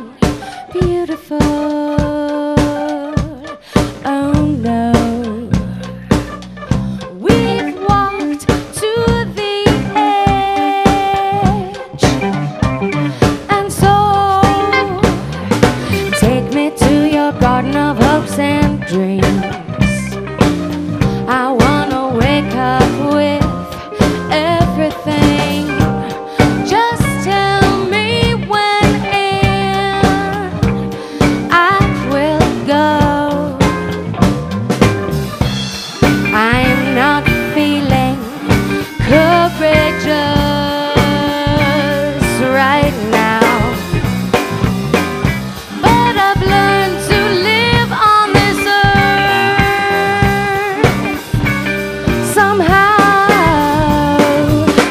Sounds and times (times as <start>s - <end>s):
Funk: 0.0s - 54.9s.